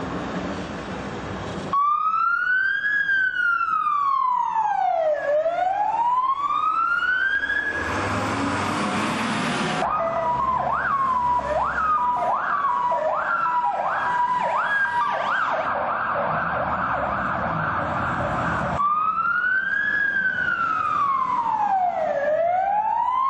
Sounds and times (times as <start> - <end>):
Fire engine, fire truck (siren): 1.7 - 23.2.